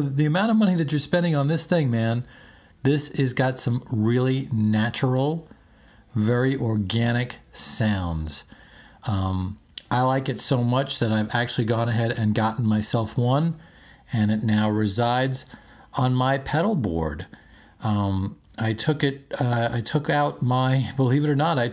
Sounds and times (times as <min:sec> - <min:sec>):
Speech: 0:00.0 - 0:05.5, 0:06.1 - 0:21.7.